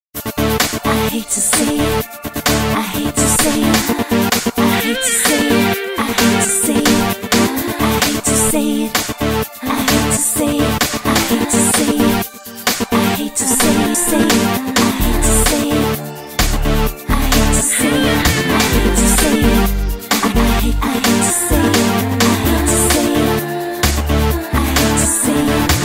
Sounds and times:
Rhythm and blues: 0.2 - 25.8.

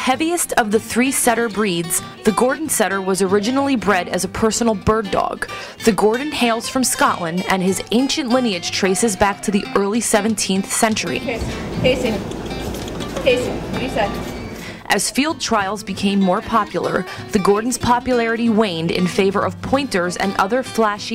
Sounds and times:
Speech: 0.0 - 12.2, 13.2 - 14.2, 14.9 - 21.1
Music: 0.0 - 21.1.

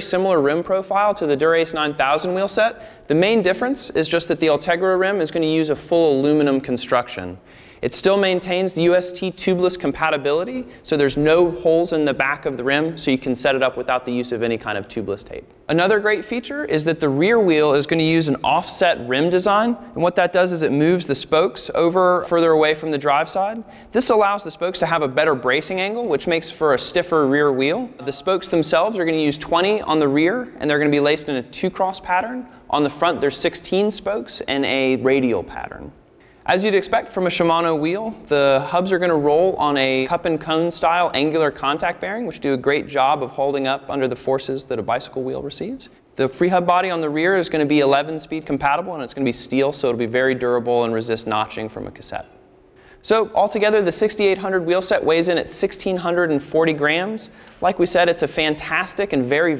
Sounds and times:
Speech: 0.0 - 52.4, 53.0 - 59.5.

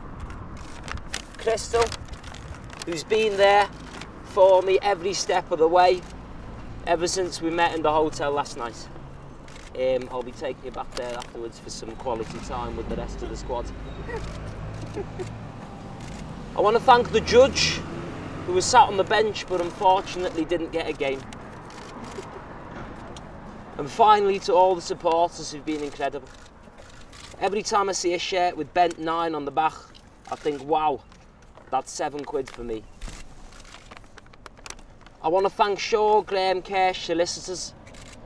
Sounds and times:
Speech: 1.4 - 2.0, 2.9 - 3.7, 9.8 - 13.7, 16.6 - 17.8, 18.5 - 21.2, 23.8 - 26.3, 27.4 - 31.0, 31.7 - 32.8, 35.2 - 37.7.

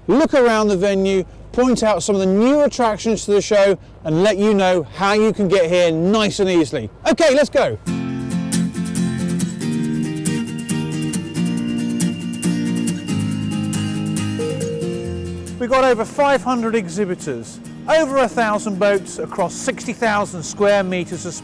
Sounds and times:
Speech: 0.1 - 7.8, 15.6 - 21.4
Music: 7.9 - 21.4.

